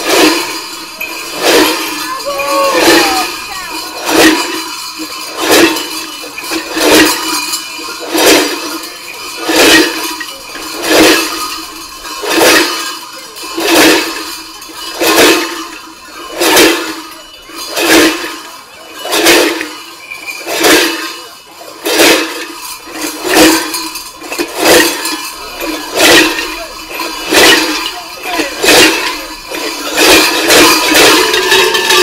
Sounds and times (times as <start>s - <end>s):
Jingle bell: 0.0s - 32.0s.